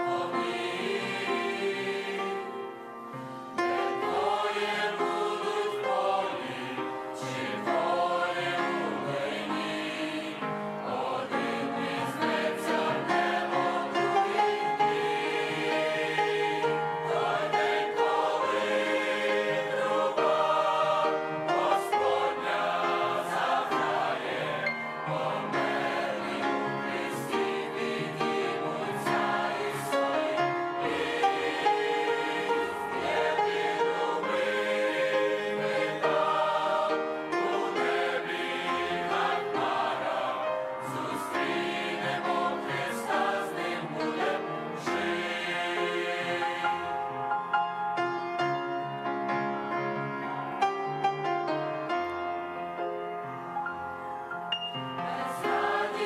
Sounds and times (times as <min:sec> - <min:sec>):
Choir: 0:00.0 - 0:49.1, 0:54.8 - 0:56.0.